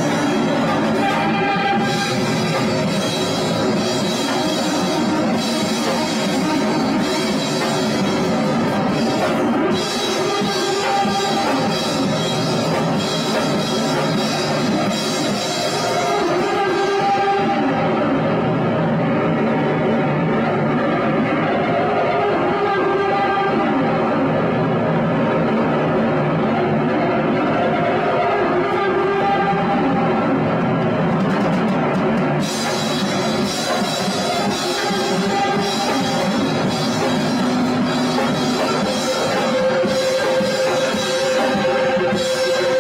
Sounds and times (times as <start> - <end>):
Rock music: 0.0 - 19.0, 31.0 - 42.8
Independent music: 0.0 - 42.8.